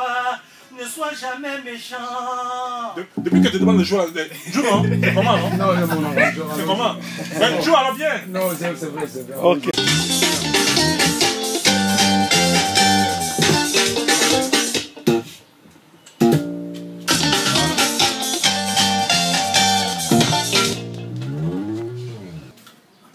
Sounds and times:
Speech: 0.7 - 9.8
Music: 3.2 - 4.0, 4.7 - 15.4, 16.1 - 22.5.

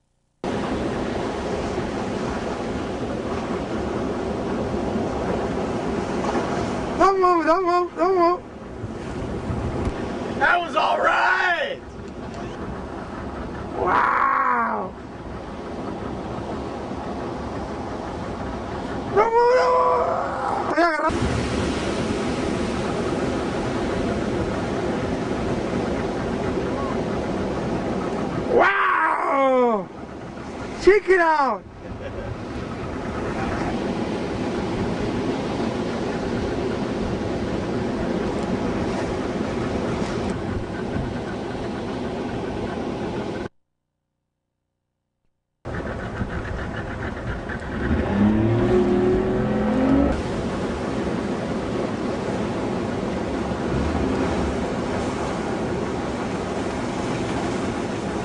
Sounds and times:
Waves, surf: 0.4 - 43.5, 45.7 - 58.2.

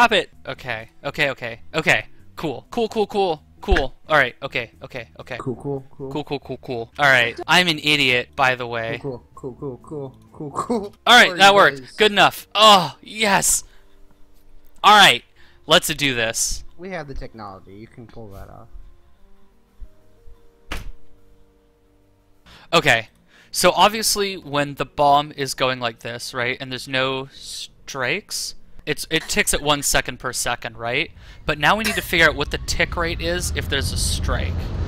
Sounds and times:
Speech: 0.0 - 13.6, 14.9 - 18.7, 22.8 - 34.6.

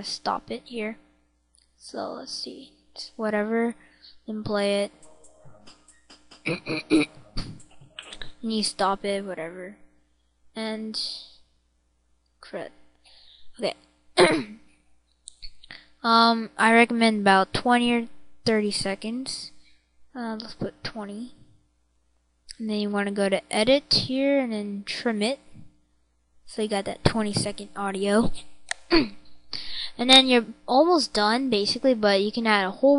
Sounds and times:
Speech: 0.0 - 1.0, 1.8 - 9.8, 10.6 - 11.3, 12.4 - 12.7, 13.5 - 14.6, 15.4 - 19.6, 20.2 - 21.4, 22.5 - 25.6, 26.5 - 32.9.

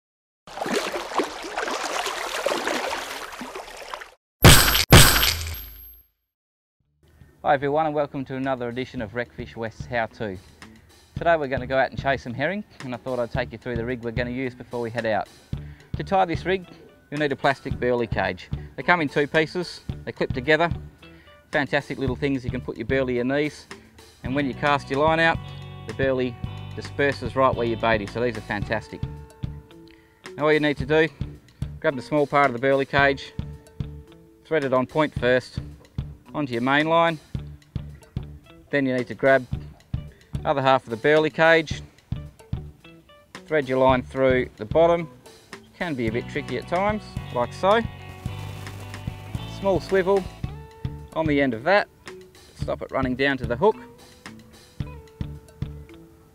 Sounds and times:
Music: 7.0 - 56.3
Speech: 7.4 - 10.4, 11.2 - 15.3, 16.0 - 20.8, 21.6 - 29.1, 30.4 - 31.2, 31.8 - 33.4, 34.4 - 35.7, 36.3 - 37.2, 38.7 - 39.6, 40.4 - 41.8, 43.5 - 45.1, 45.7 - 47.9, 49.4 - 50.3, 51.1 - 51.9, 52.6 - 53.9.

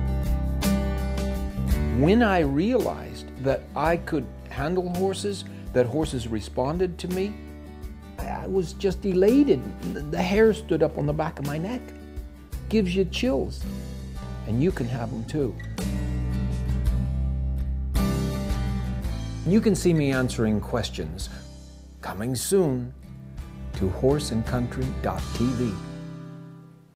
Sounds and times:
Music: 0.0 - 26.9
Speech: 1.9 - 7.4, 8.2 - 11.9, 12.7 - 13.7, 14.4 - 15.6, 19.4 - 21.4, 22.0 - 23.0, 23.8 - 25.8.

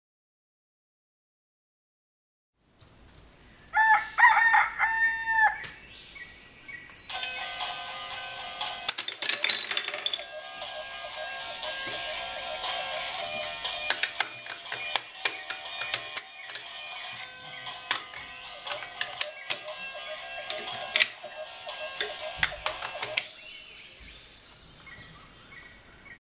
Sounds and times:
Music: 7.1 - 23.4.

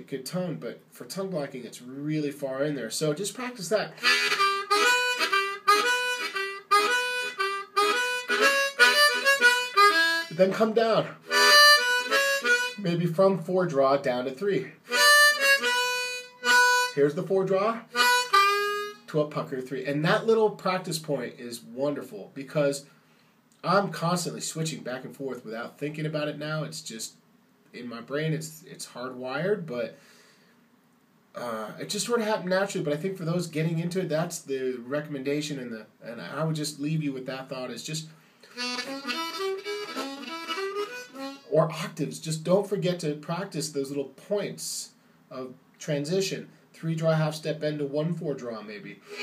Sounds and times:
Speech: 0.0 - 4.0, 10.3 - 11.2, 12.8 - 14.8, 17.0 - 17.9, 19.1 - 22.9, 23.6 - 30.0, 31.4 - 38.1, 41.4 - 49.0
Harmonica: 3.4 - 13.0, 14.6 - 19.2, 38.4 - 41.9, 49.0 - 49.2.

